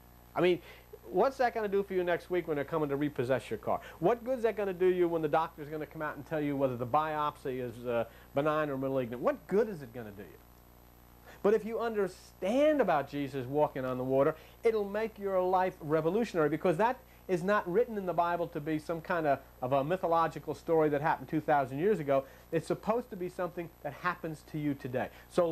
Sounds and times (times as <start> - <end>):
Speech: 0.4 - 10.4, 11.4 - 25.5.